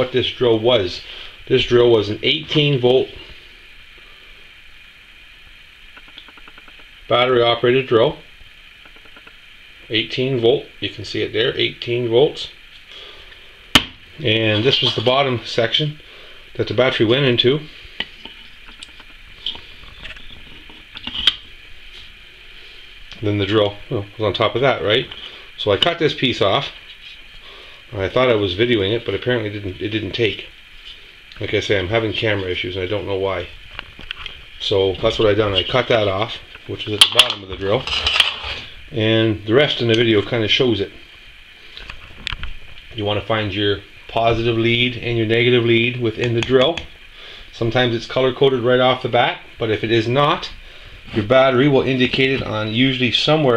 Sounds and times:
Speech: 0:00.0 - 0:03.2, 0:07.1 - 0:08.3, 0:09.9 - 0:12.6, 0:14.2 - 0:16.0, 0:16.6 - 0:17.7, 0:23.2 - 0:26.8, 0:27.9 - 0:30.5, 0:31.4 - 0:33.6, 0:34.6 - 0:37.9, 0:38.9 - 0:41.0, 0:42.9 - 0:46.9, 0:47.5 - 0:53.5.

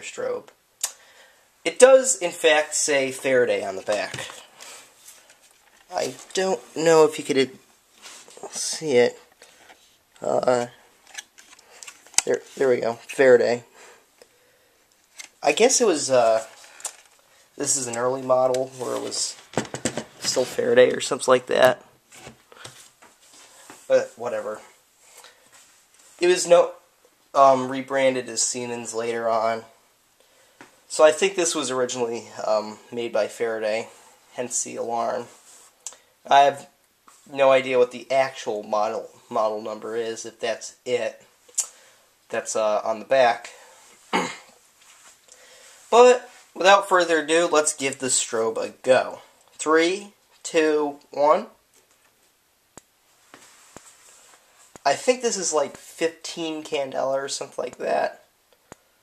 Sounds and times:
Speech: 0:00.0 - 0:00.6, 0:01.7 - 0:04.4, 0:05.9 - 0:07.6, 0:08.4 - 0:09.3, 0:10.2 - 0:10.8, 0:12.2 - 0:13.7, 0:15.4 - 0:16.6, 0:17.6 - 0:19.4, 0:20.2 - 0:21.9, 0:23.9 - 0:24.8, 0:26.2 - 0:29.8, 0:30.9 - 0:35.4, 0:36.3 - 0:41.7, 0:42.3 - 0:43.6, 0:45.9 - 0:51.6, 0:54.8 - 0:58.3.

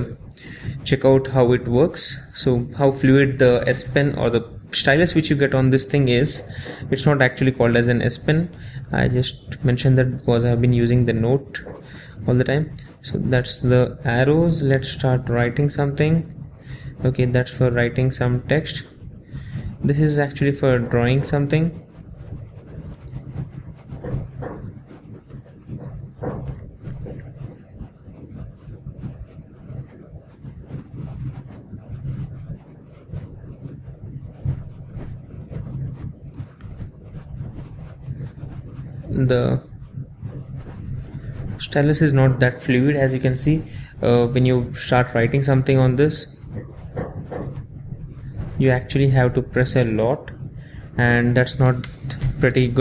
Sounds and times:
Speech: 0:00.0 - 0:16.3, 0:16.9 - 0:18.9, 0:19.8 - 0:21.8, 0:39.1 - 0:39.7, 0:41.6 - 0:46.4, 0:48.6 - 0:50.4, 0:51.0 - 0:52.8
Inside, small room: 0:00.0 - 0:52.8.

